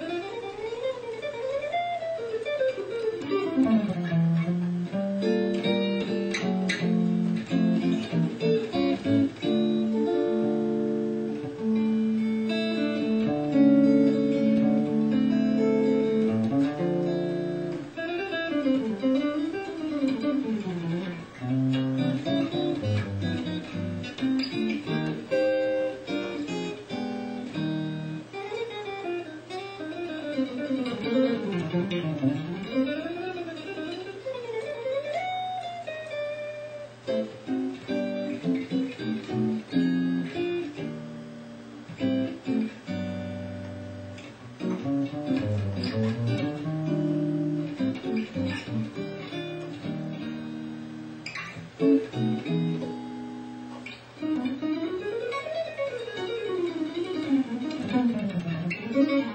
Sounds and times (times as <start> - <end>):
Electric guitar: 0.0 - 59.3
Acoustic guitar: 2.4 - 34.2, 36.5 - 59.3
Strum: 3.2 - 28.4.